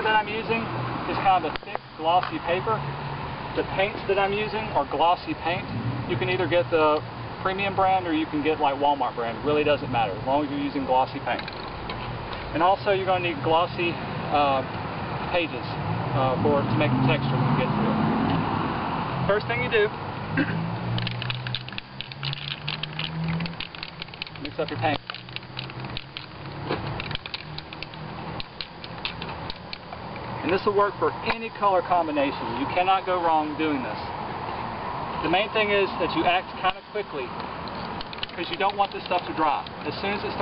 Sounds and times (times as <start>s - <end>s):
Speech: 0.0s - 2.8s, 3.6s - 11.4s, 12.5s - 14.7s, 15.3s - 18.0s, 19.3s - 19.9s, 24.4s - 25.0s, 30.4s - 34.1s, 35.2s - 37.3s, 38.3s - 40.4s.